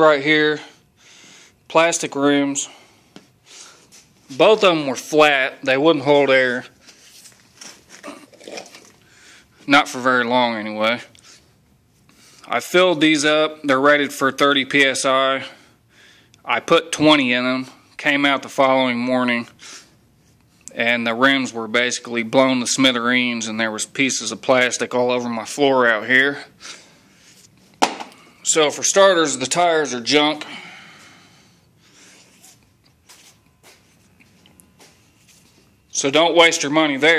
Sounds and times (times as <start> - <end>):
Speech: 0.0 - 0.7, 1.7 - 2.8, 4.3 - 6.7, 9.7 - 11.1, 12.5 - 15.6, 16.4 - 19.6, 20.7 - 26.5, 28.4 - 30.5, 35.9 - 37.1.